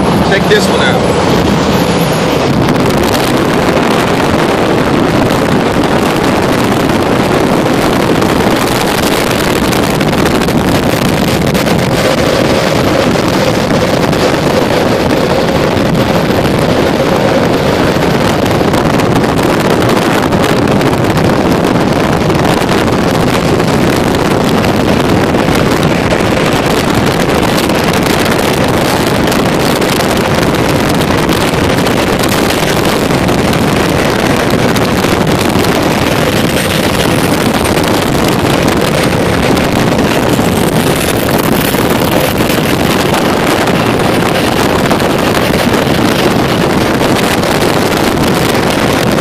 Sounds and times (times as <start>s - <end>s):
Vehicle: 0.0s - 49.2s.